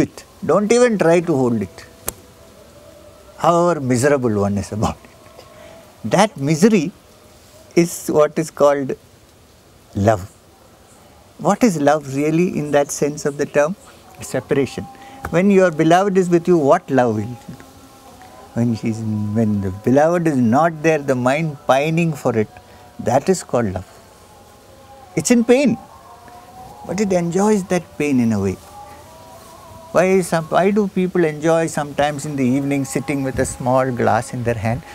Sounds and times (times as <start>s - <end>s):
Speech: 0.0s - 1.9s, 3.4s - 5.0s, 6.0s - 7.0s, 7.8s - 9.0s, 10.0s - 10.3s, 11.4s - 17.6s, 18.5s - 23.9s, 25.2s - 25.8s, 26.8s - 28.6s, 30.0s - 34.9s.